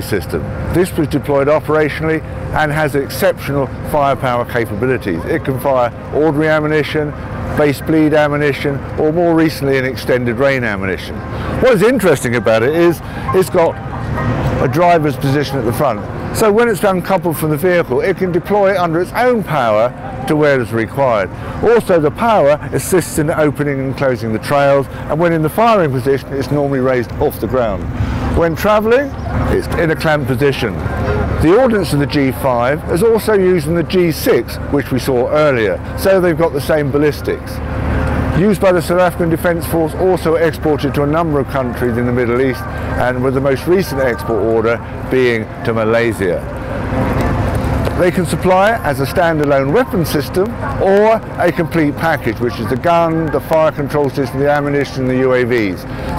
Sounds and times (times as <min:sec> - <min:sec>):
Speech: 0:00.0 - 0:13.8, 0:14.5 - 0:37.6, 0:38.3 - 0:46.6, 0:47.9 - 0:56.1
Outside, urban or manmade: 0:00.0 - 0:56.1.